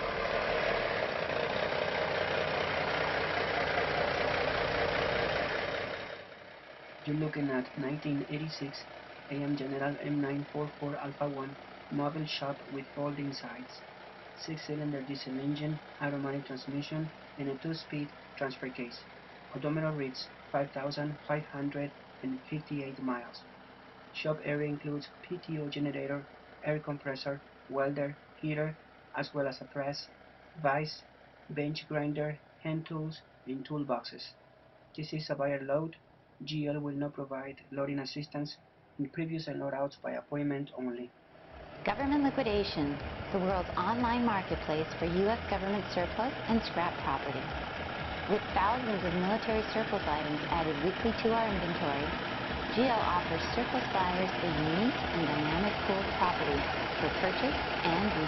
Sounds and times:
Truck: 0.0s - 58.2s
Speech: 7.1s - 13.8s, 14.4s - 23.4s, 24.2s - 34.4s, 35.0s - 41.1s, 41.9s - 47.5s, 48.3s - 58.2s.

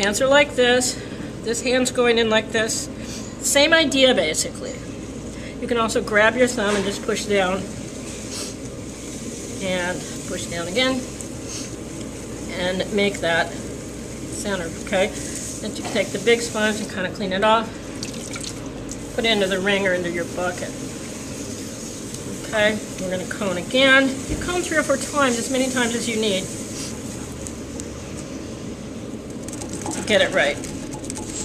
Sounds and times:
Speech: 0.0s - 4.9s, 5.6s - 7.7s, 9.6s - 11.1s, 12.5s - 13.5s, 14.4s - 17.7s, 19.2s - 20.7s, 22.4s - 26.5s, 30.0s - 30.6s.

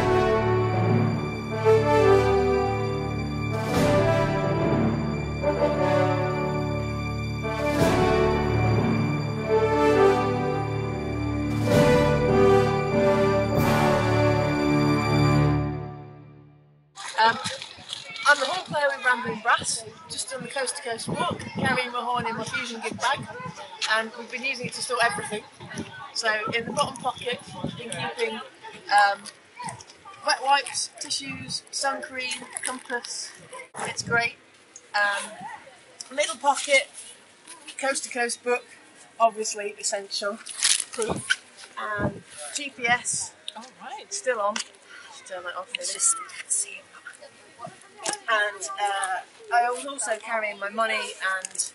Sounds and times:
Speech: 17.0s - 34.4s, 35.0s - 38.6s, 39.2s - 40.4s, 41.0s - 44.6s, 45.2s - 51.7s.

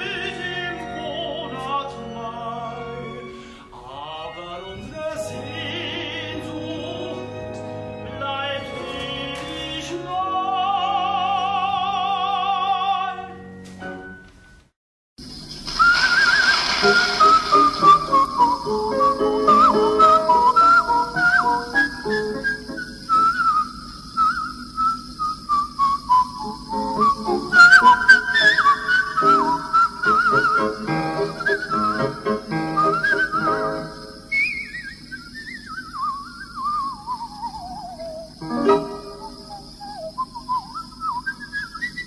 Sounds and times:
Whistle: 15.6s - 42.0s.

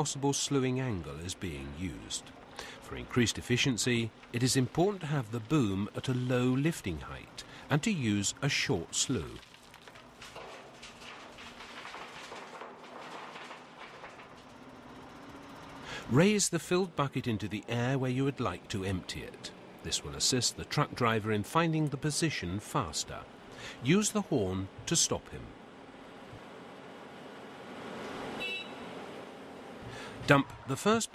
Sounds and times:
Speech: 0.0s - 9.4s, 16.1s - 25.5s, 30.2s - 31.1s
Truck: 0.0s - 11.0s, 12.9s - 31.1s.

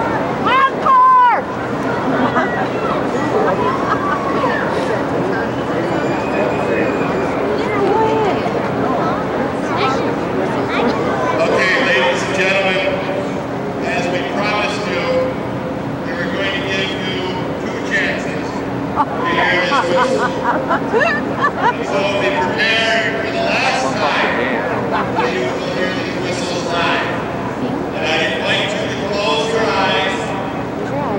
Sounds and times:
Inside, public space: 0.0s - 31.1s
Speech: 21.0s - 31.1s.

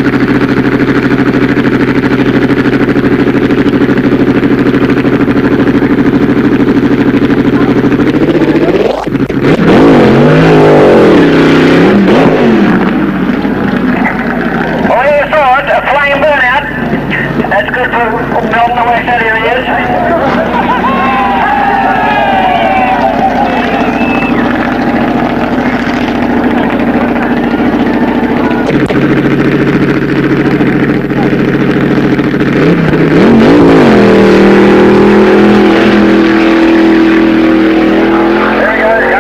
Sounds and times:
Race car, auto racing: 0.0s - 39.2s.

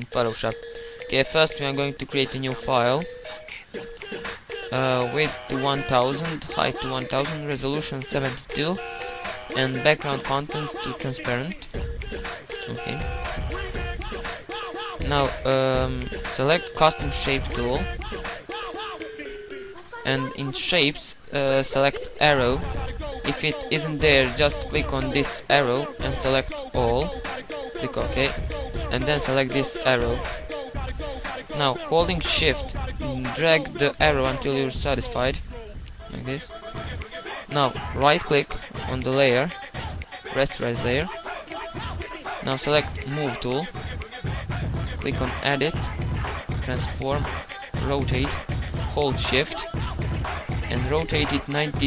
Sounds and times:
Speech: 0.0s - 3.7s, 4.8s - 8.8s, 9.6s - 11.7s, 12.6s - 13.2s, 15.0s - 17.9s, 20.0s - 27.1s, 27.8s - 30.3s, 31.6s - 35.4s, 36.1s - 36.5s, 37.5s - 39.6s, 40.4s - 41.1s, 42.5s - 43.7s, 45.0s - 46.0s, 46.6s - 49.7s, 50.7s - 51.8s
Music: 0.0s - 51.8s.

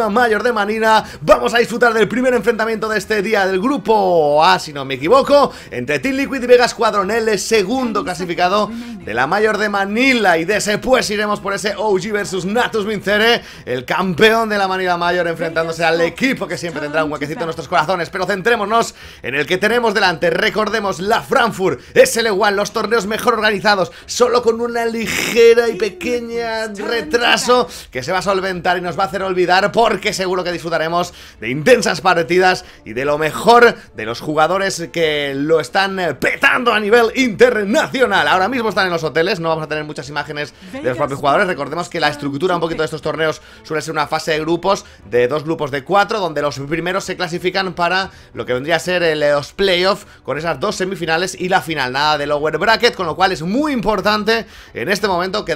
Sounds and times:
Speech: 0.0s - 55.5s.

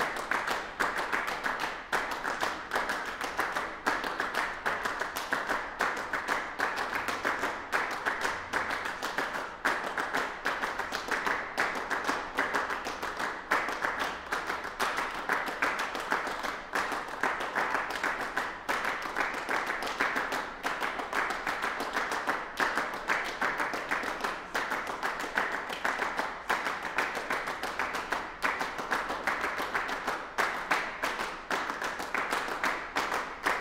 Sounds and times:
Clapping: 0.0s - 33.6s.

